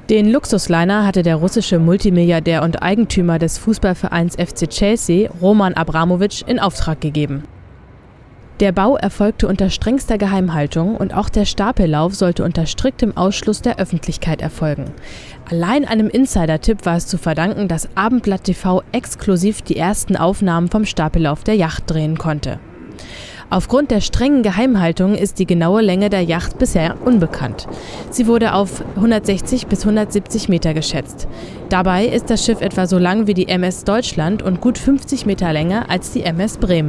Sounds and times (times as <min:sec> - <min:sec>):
Speech: 0:00.1 - 0:07.5, 0:08.6 - 0:22.6, 0:23.5 - 0:36.8.